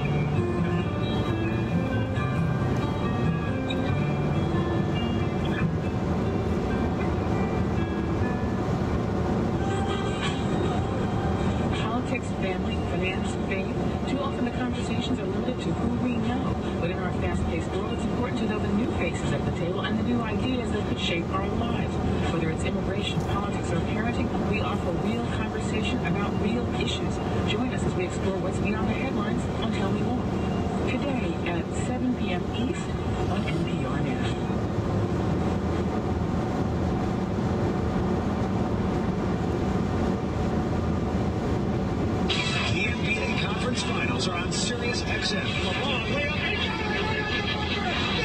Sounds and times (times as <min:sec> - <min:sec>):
Vehicle: 0:00.0 - 0:48.2
Speech: 0:11.8 - 0:30.2, 0:30.9 - 0:34.5, 0:42.3 - 0:48.2.